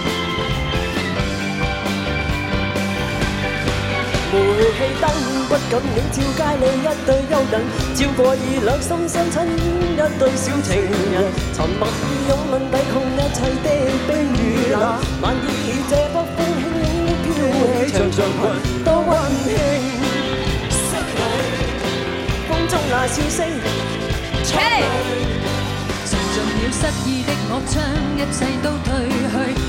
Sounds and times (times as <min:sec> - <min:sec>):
Music: 0:00.0 - 0:29.6.